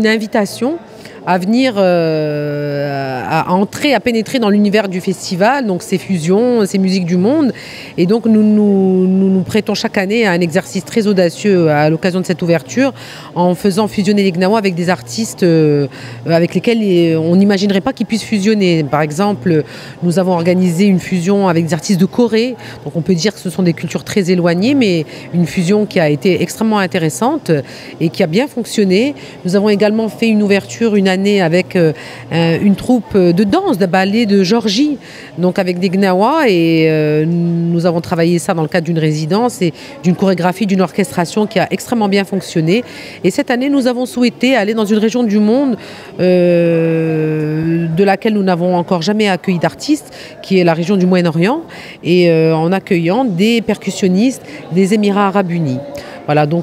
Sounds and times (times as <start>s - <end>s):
Speech: 0.0s - 56.6s.